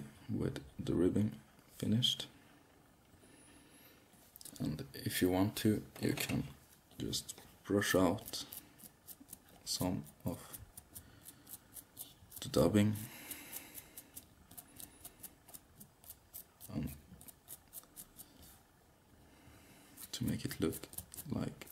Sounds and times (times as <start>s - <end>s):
Speech: 0.0s - 2.3s, 4.6s - 8.5s, 9.7s - 10.6s, 12.4s - 13.1s, 16.7s - 17.0s, 20.1s - 21.7s
Inside, small room: 0.0s - 21.7s.